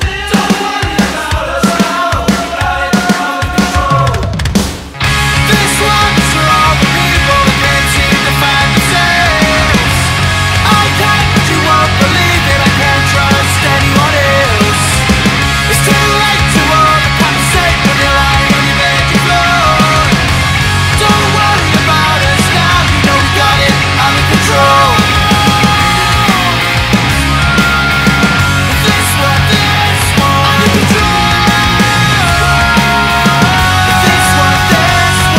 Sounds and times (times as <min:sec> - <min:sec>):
Grunge: 0:00.0 - 0:35.3.